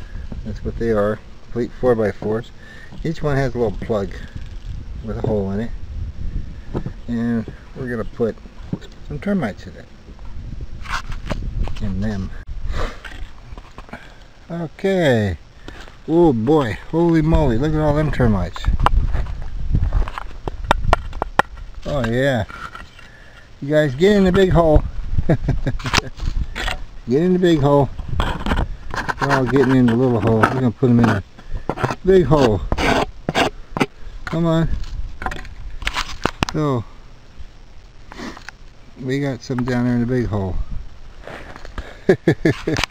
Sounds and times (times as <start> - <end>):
Speech: 0.4 - 4.3, 5.0 - 5.8, 7.1 - 8.4, 9.0 - 9.9, 11.8 - 12.4, 14.5 - 15.4, 16.1 - 18.7, 21.8 - 22.5, 23.6 - 24.8, 27.1 - 27.9, 29.2 - 31.3, 32.0 - 32.7, 34.3 - 34.8, 36.5 - 36.9, 39.0 - 40.7.